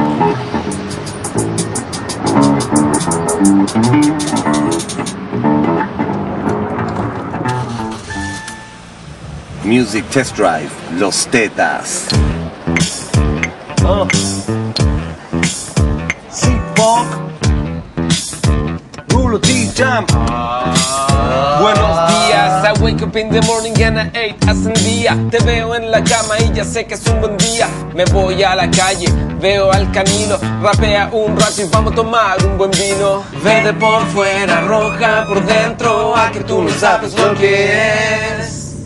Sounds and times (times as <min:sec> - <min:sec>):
Music: 0:00.0 - 0:08.9, 0:12.1 - 0:38.8.